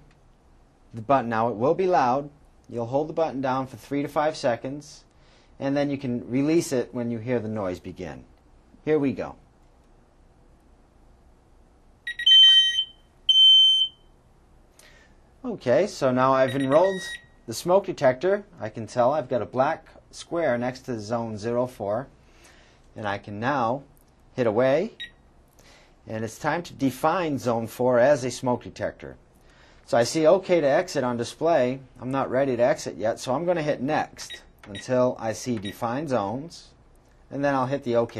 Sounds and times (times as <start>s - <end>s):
Speech: 0.9s - 9.4s, 15.4s - 22.1s, 23.0s - 25.0s, 26.1s - 29.2s, 29.9s - 38.1s
Smoke detector, smoke alarm: 12.1s - 14.1s, 16.5s - 17.4s.